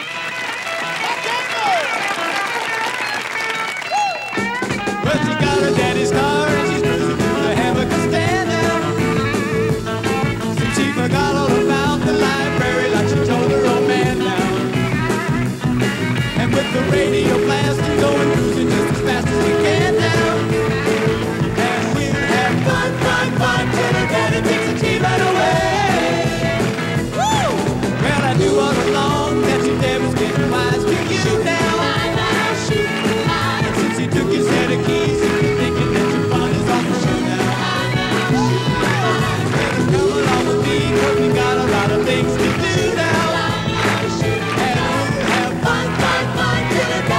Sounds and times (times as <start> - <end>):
Music: 0.0 - 47.1.